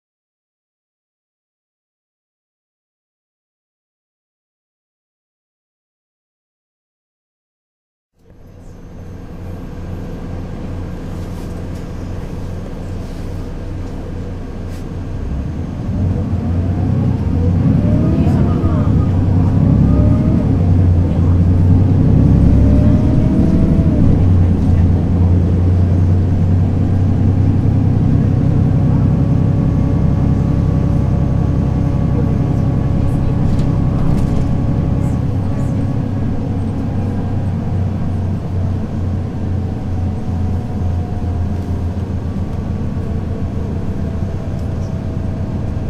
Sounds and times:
Bus: 8.2s - 45.9s.

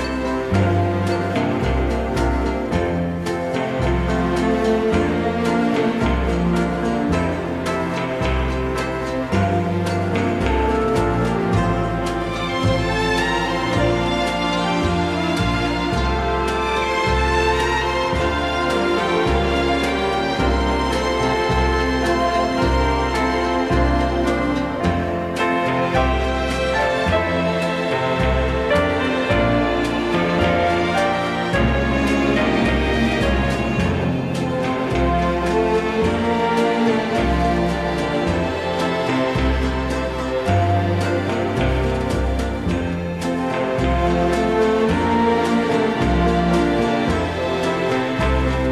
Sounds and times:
Orchestra: 0.0s - 48.7s.

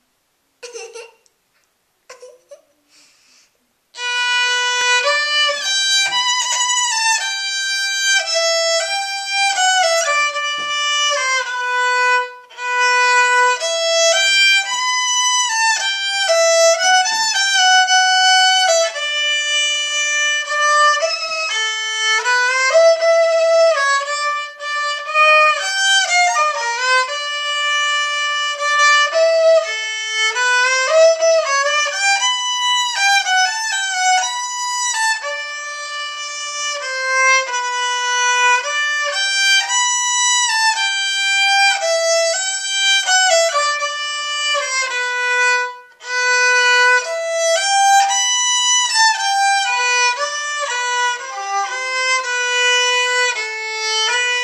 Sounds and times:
Violin, fiddle: 3.9s - 54.4s.

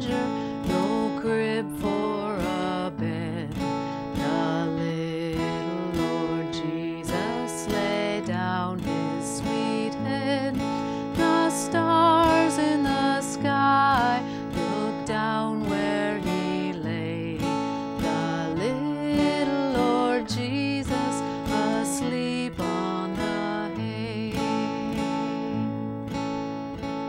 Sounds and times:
Acoustic guitar: 0.0s - 27.0s
Strum: 0.0s - 27.0s.

